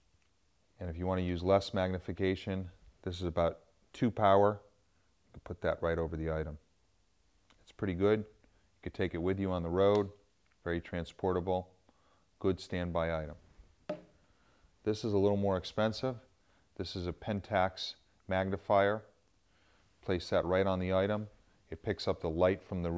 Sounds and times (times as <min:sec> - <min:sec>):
Speech: 0:00.8 - 0:06.7, 0:07.5 - 0:11.8, 0:12.4 - 0:13.4, 0:14.8 - 0:19.2, 0:20.0 - 0:22.9.